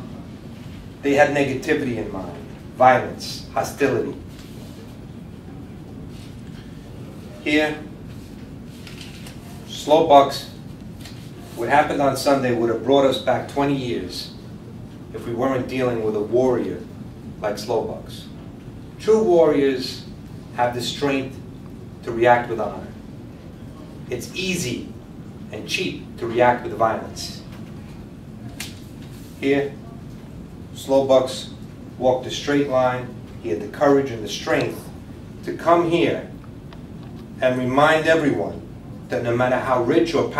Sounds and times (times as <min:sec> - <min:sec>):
Speech: 0:01.0 - 0:04.3, 0:07.1 - 0:08.0, 0:09.4 - 0:10.6, 0:11.5 - 0:14.4, 0:15.1 - 0:18.4, 0:19.0 - 0:21.4, 0:22.0 - 0:23.0, 0:23.6 - 0:27.6, 0:29.4 - 0:36.4, 0:37.4 - 0:40.3.